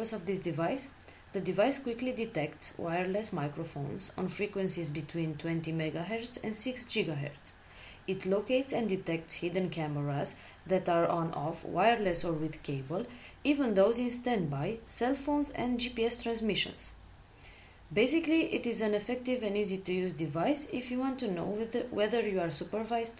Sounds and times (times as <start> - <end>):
Speech: 0.0 - 17.0, 17.9 - 23.2.